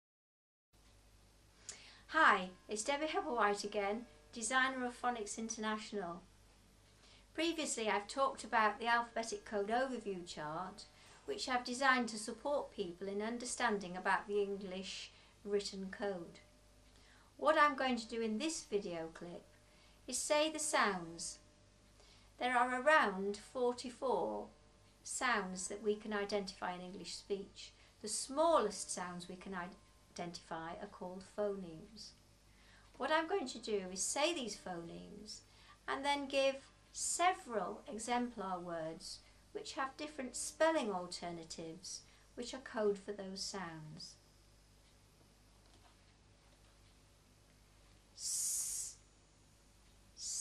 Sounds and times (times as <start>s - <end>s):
Speech: 2.1s - 6.3s, 7.3s - 16.5s, 17.4s - 19.5s, 20.1s - 21.4s, 22.4s - 32.2s, 33.0s - 44.2s, 50.2s - 50.4s.